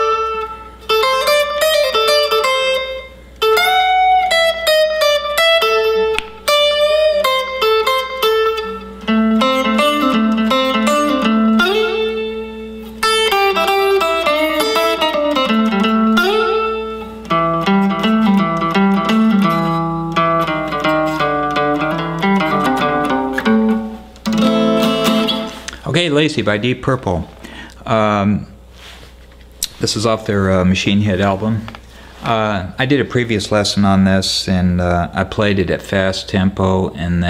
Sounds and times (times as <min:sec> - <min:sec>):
Electric guitar: 0:00.0 - 0:25.8
Strum: 0:00.0 - 0:25.8
Speech: 0:25.8 - 0:28.6, 0:29.7 - 0:37.2.